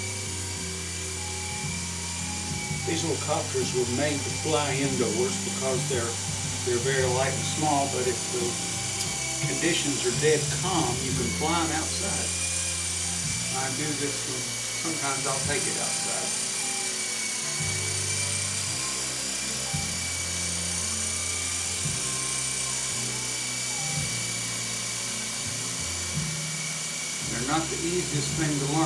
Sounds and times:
Speech: 2.9 - 8.6, 9.5 - 12.4, 13.5 - 16.3, 27.3 - 28.8.

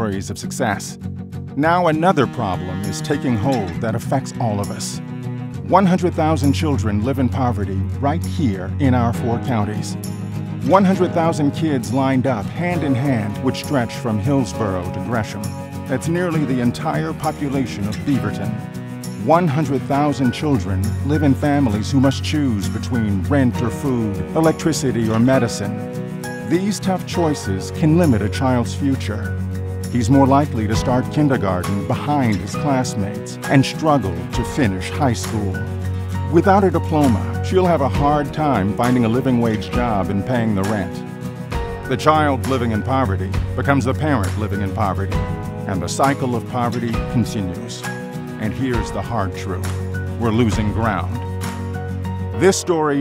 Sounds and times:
Speech: 0.0 - 1.0, 1.6 - 5.0, 5.7 - 10.0, 10.6 - 18.6, 19.2 - 25.8, 26.4 - 41.1, 41.9 - 51.2, 52.4 - 53.0
Music: 0.0 - 53.0.

